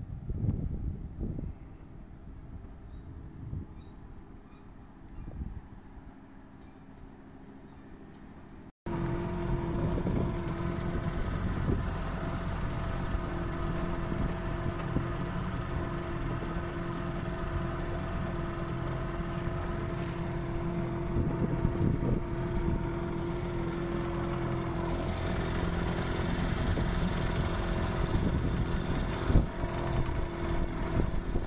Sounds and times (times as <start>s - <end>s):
Motorboat, speedboat: 8.9s - 31.4s.